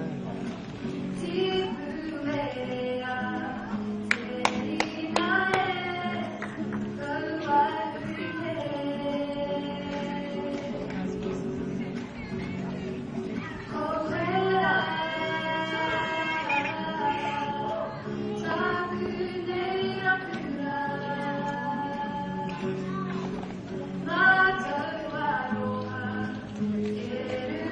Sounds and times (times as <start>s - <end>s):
Music: 0.0s - 27.7s
Female singing: 1.2s - 11.1s, 13.4s - 23.0s, 24.0s - 27.7s.